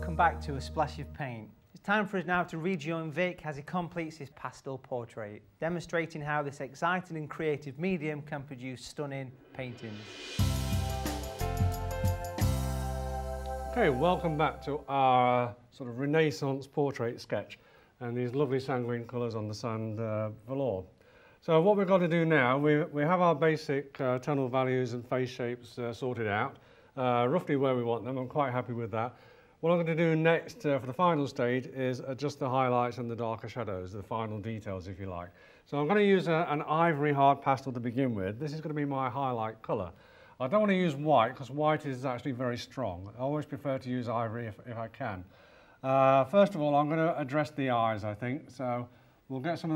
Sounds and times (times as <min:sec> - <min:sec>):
Speech: 0:00.0 - 0:10.2, 0:13.8 - 0:49.7.